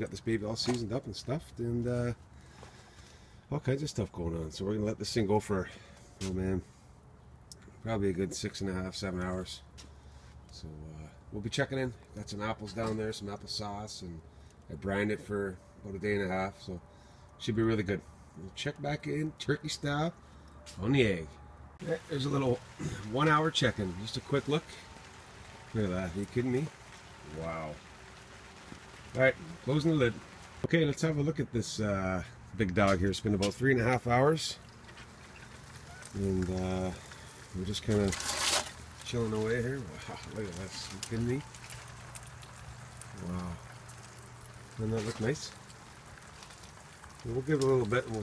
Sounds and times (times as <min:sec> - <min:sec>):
Speech: 0:00.0 - 0:02.2, 0:03.5 - 0:06.7, 0:07.8 - 0:09.7, 0:10.5 - 0:16.8, 0:17.4 - 0:20.2, 0:20.8 - 0:24.8, 0:25.7 - 0:27.8, 0:29.1 - 0:34.6, 0:36.2 - 0:38.2, 0:39.0 - 0:41.5, 0:43.2 - 0:43.6, 0:44.8 - 0:45.6, 0:47.2 - 0:48.2.